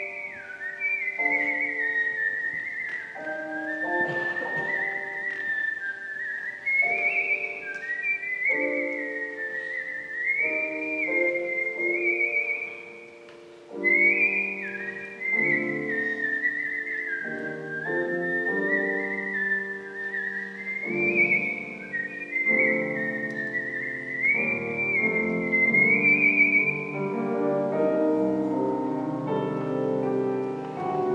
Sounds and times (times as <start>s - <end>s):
Music: 0.0s - 31.1s.